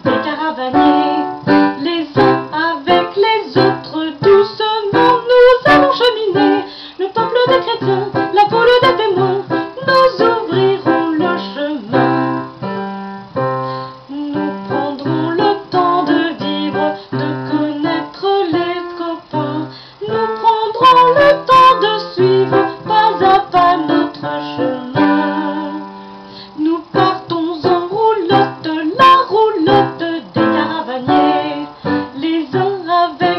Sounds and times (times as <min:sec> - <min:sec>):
Music: 0:00.0 - 0:33.3.